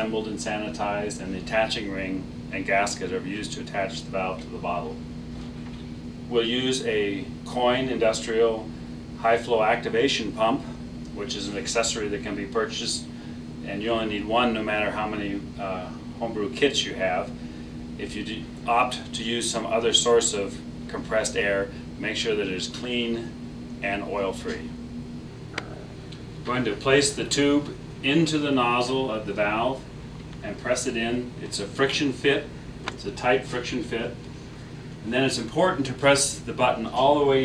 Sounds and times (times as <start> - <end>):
Speech: 0.0 - 5.0, 6.3 - 17.4, 18.0 - 24.8, 26.4 - 34.2, 35.0 - 37.4.